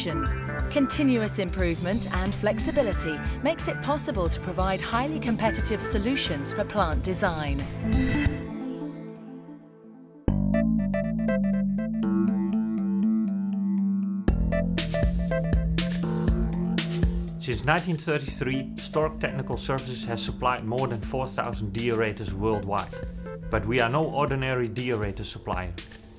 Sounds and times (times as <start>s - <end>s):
Speech: 0.0s - 7.7s, 17.4s - 25.8s
Music: 0.0s - 26.1s.